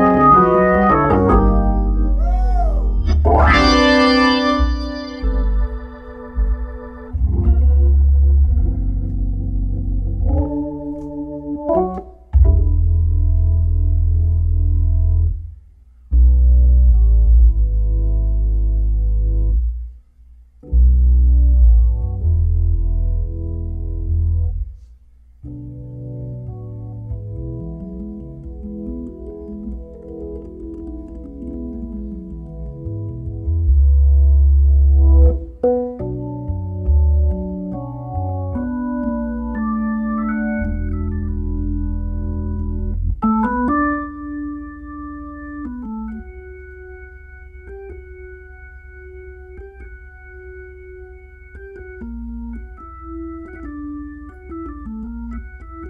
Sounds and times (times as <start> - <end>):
Piano: 0.0 - 55.9.